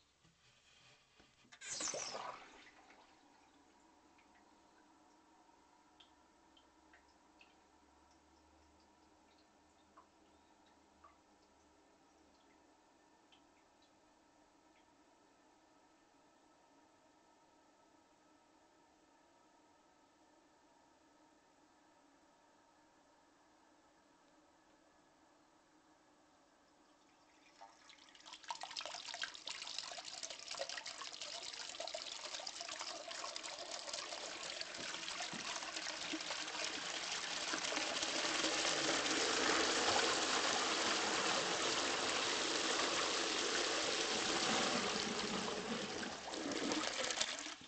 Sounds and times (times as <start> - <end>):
Toilet flush: 0.5 - 3.6, 27.3 - 47.6
Water: 0.7 - 14.0, 26.7 - 47.6.